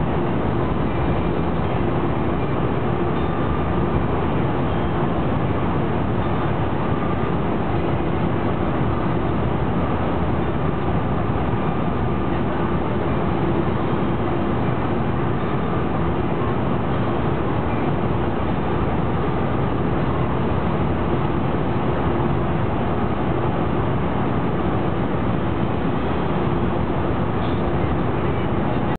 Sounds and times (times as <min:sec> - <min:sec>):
Vehicle: 0:00.0 - 0:28.9.